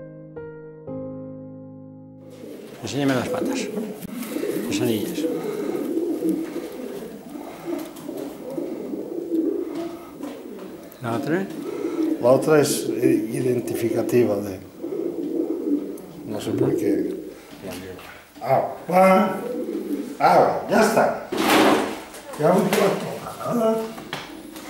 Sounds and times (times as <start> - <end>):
Pigeon, dove: 2.3 - 17.3, 18.4 - 24.7
Speech: 2.8 - 3.8, 4.7 - 5.3, 12.2 - 14.6, 16.3 - 19.4, 20.2 - 21.2, 22.3 - 24.0.